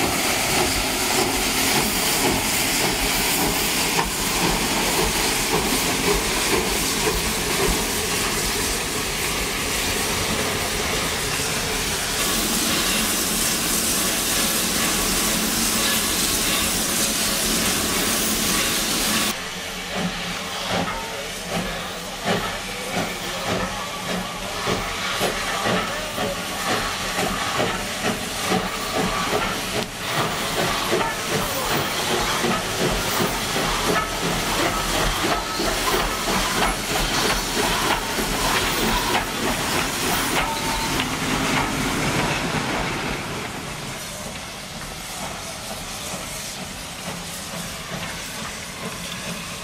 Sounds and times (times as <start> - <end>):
Hiss: 0.0 - 49.6
Railroad car, train wagon: 0.0 - 49.6
Train: 0.0 - 49.6.